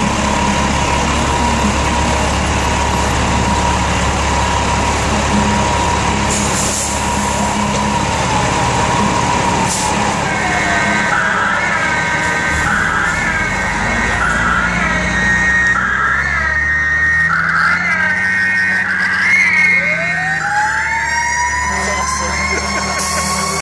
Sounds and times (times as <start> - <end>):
Fire engine, fire truck (siren): 0.0 - 23.6
Speech: 21.6 - 23.1.